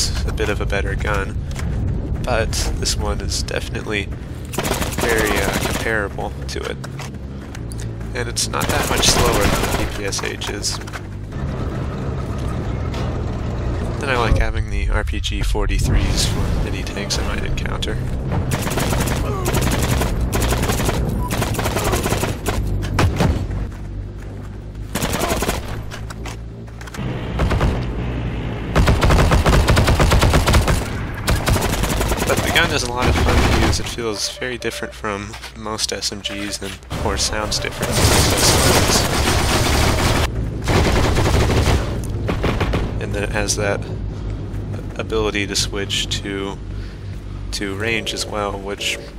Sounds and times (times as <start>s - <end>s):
Speech: 0.0s - 1.4s, 2.2s - 4.1s, 5.0s - 6.8s, 8.1s - 10.8s, 14.0s - 18.0s, 32.2s - 39.1s, 43.0s - 43.9s, 44.8s - 46.6s, 47.5s - 49.1s
Outside, rural or natural: 0.0s - 49.1s.